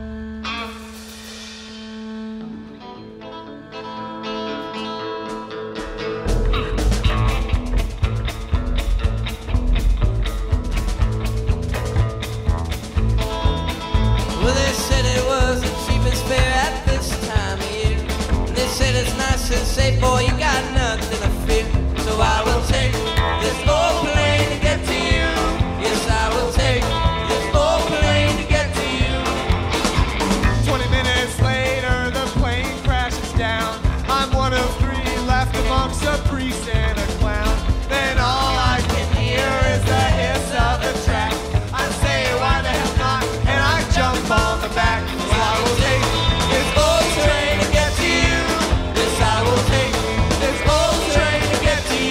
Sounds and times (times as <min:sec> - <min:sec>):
Music: 0:00.0 - 0:52.1.